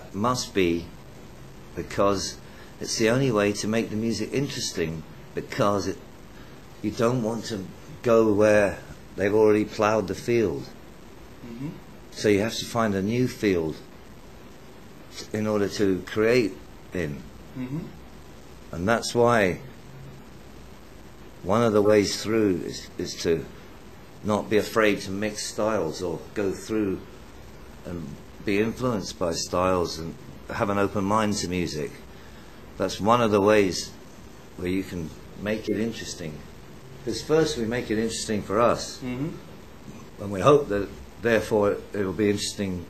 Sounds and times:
Speech: 0.0 - 1.0, 1.8 - 6.0, 6.8 - 10.8, 11.4 - 13.9, 15.1 - 18.0, 18.7 - 19.7, 21.4 - 23.5, 24.2 - 27.1, 27.8 - 32.0, 32.8 - 34.0, 34.6 - 42.9.

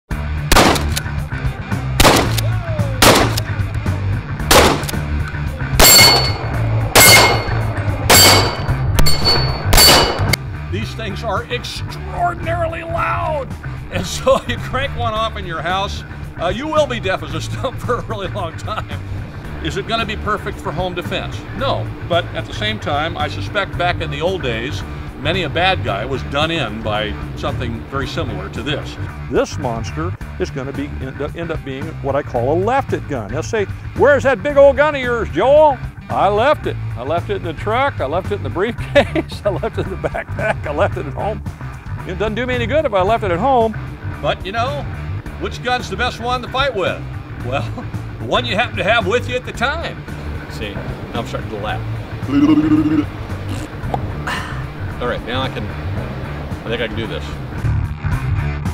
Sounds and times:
Gunshot, gunfire: 0.5 - 1.0, 2.0 - 3.4, 4.5 - 5.0, 5.8 - 6.4, 7.0 - 10.4
Clang: 5.8 - 10.4.

